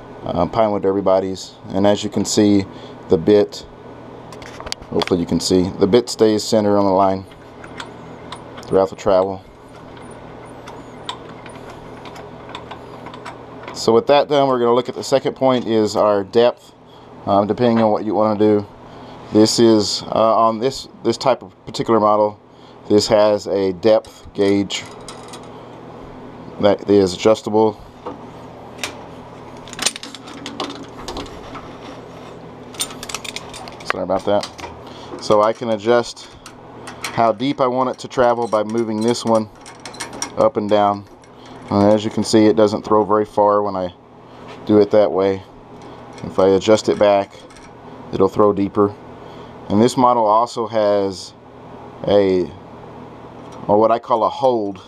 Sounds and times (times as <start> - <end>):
Speech: 0.2 - 3.7, 4.9 - 7.3, 8.6 - 9.5, 13.8 - 18.7, 19.3 - 24.9, 26.6 - 27.8, 33.9 - 34.6, 35.2 - 36.4, 37.2 - 39.5, 40.4 - 41.1, 41.7 - 44.0, 44.6 - 45.5, 46.2 - 47.4, 48.1 - 49.0, 49.7 - 51.4, 52.0 - 52.6, 53.6 - 54.8.